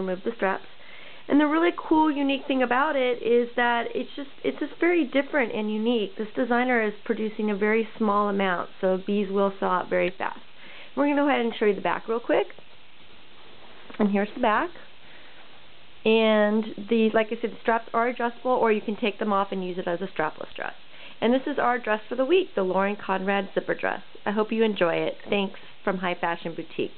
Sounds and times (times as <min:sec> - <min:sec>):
Speech: 0:00.0 - 0:00.7, 0:01.3 - 0:10.4, 0:11.0 - 0:12.6, 0:14.0 - 0:14.9, 0:16.1 - 0:26.9.